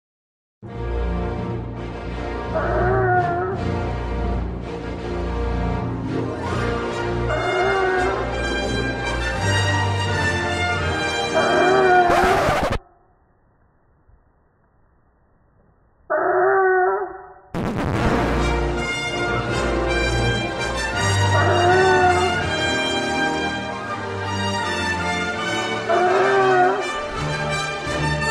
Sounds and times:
Music: 0.6 - 12.8, 17.6 - 28.3
Animal: 2.6 - 3.6, 11.4 - 13.0, 16.1 - 17.5.

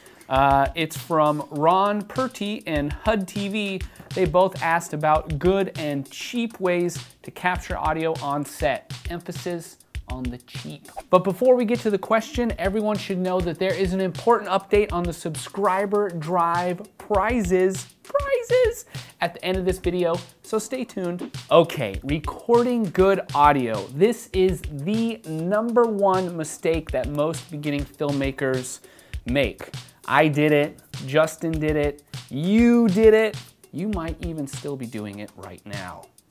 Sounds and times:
Music: 0.0 - 36.3
Speech: 0.3 - 36.1.

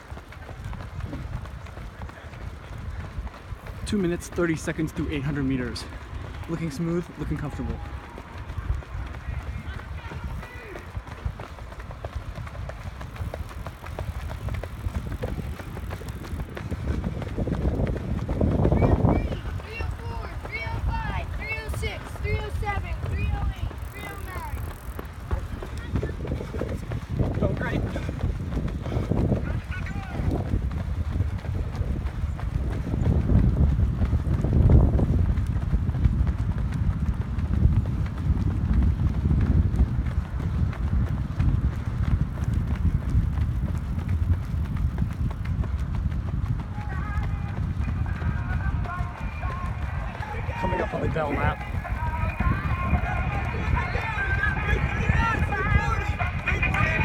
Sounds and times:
Run: 0.0 - 57.0.

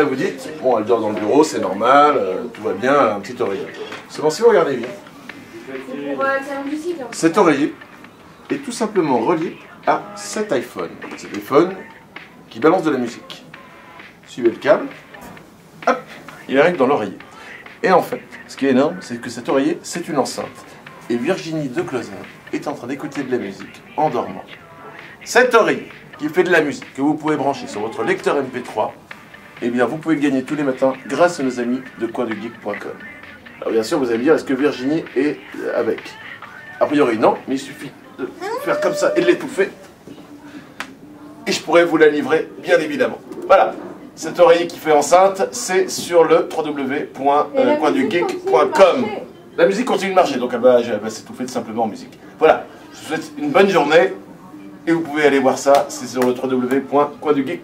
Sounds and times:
Speech: 0.0 - 7.8, 8.5 - 13.4, 14.3 - 29.0, 29.6 - 40.3, 41.4 - 57.6.

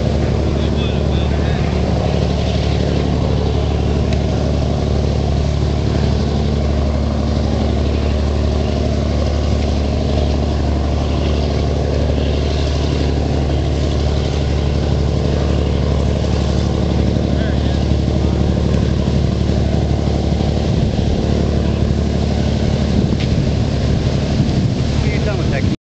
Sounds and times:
Motorboat, speedboat: 0.0 - 25.8
Speech: 0.5 - 1.8, 17.3 - 18.0, 25.0 - 25.8.

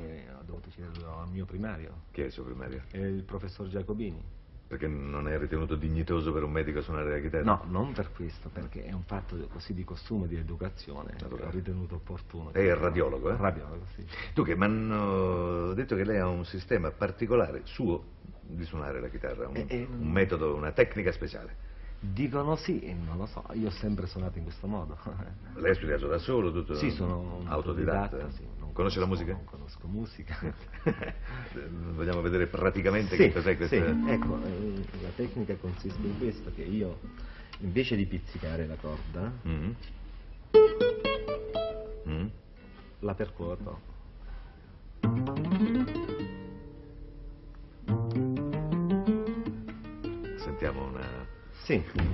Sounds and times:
Speech: 0.0 - 30.6, 31.6 - 39.9, 43.0 - 43.9, 50.4 - 52.1.

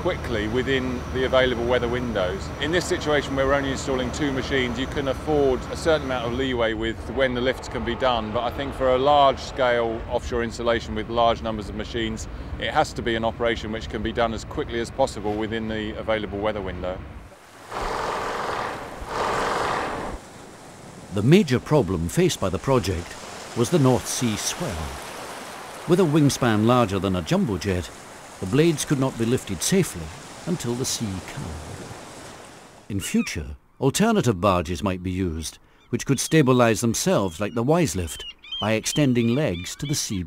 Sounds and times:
Stream: 0.0 - 11.4, 17.2 - 33.0.

